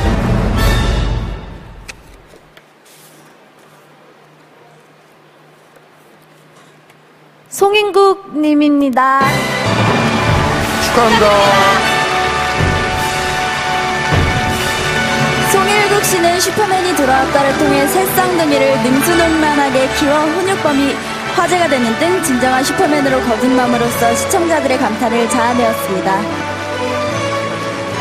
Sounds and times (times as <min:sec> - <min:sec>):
Music: 0:00.0 - 0:02.1, 0:09.2 - 0:28.0
Female speech, woman speaking: 0:07.5 - 0:09.3, 0:10.8 - 0:11.9, 0:15.5 - 0:26.3.